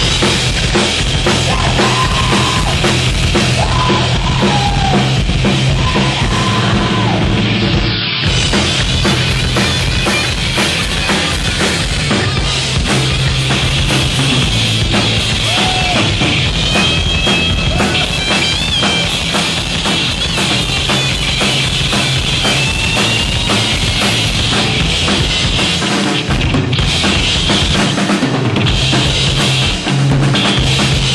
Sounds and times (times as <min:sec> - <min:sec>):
Drum: 0:00.0 - 0:31.1
Guitar: 0:00.0 - 0:31.1.